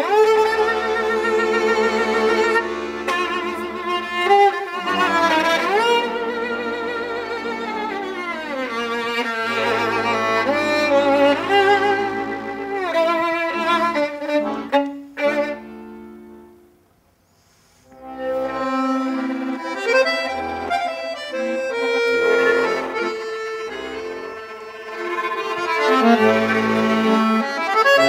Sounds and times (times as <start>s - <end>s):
Violin, fiddle: 0.0s - 16.6s, 17.9s - 28.0s.